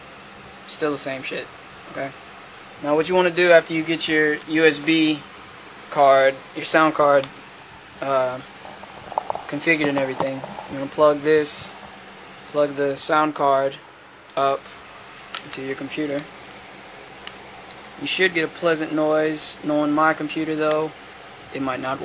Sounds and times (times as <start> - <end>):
Speech: 0.7 - 2.2, 2.8 - 5.3, 5.9 - 7.3, 8.0 - 8.4, 9.5 - 11.8, 12.6 - 13.8, 14.4 - 14.6, 15.4 - 16.3, 18.0 - 22.0.